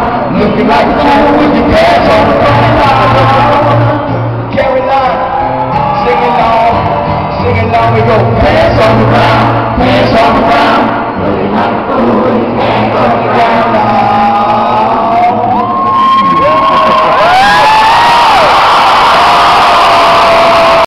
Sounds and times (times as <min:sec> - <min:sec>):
Male singing: 0:00.0 - 0:15.8
Music: 0:00.0 - 0:19.0.